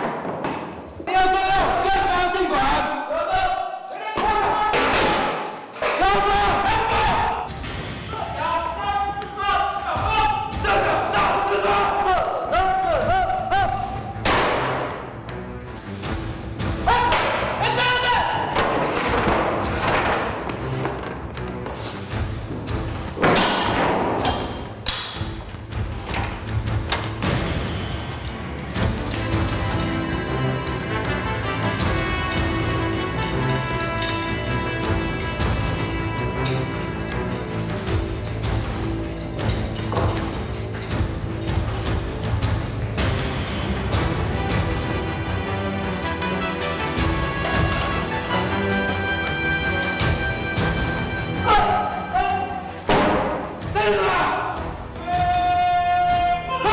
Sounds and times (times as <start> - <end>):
Inside, large room or hall: 0.0 - 56.7
Music: 0.0 - 56.7.